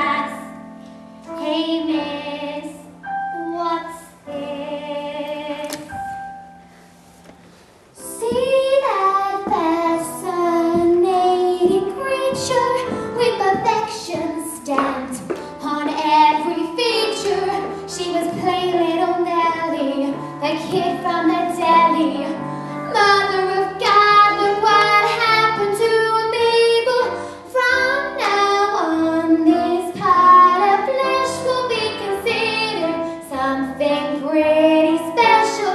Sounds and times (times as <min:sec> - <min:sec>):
Music: 0:00.0 - 0:35.7.